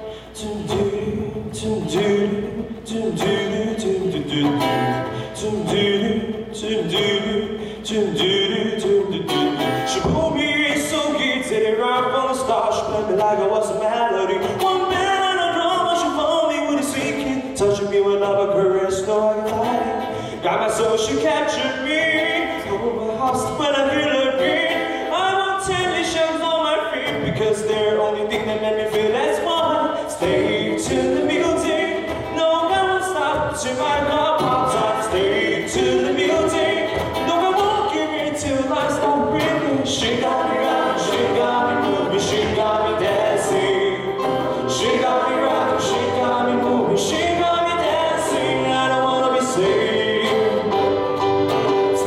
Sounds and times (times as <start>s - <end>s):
Pop music: 29.6s - 52.0s.